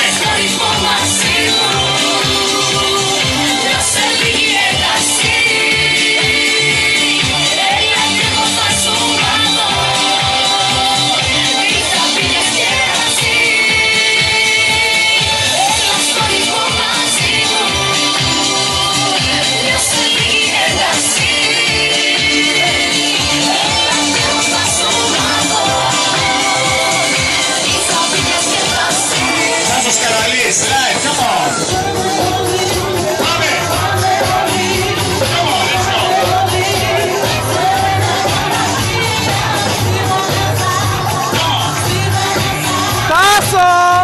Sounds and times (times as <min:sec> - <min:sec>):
Music: 0:00.0 - 0:44.0.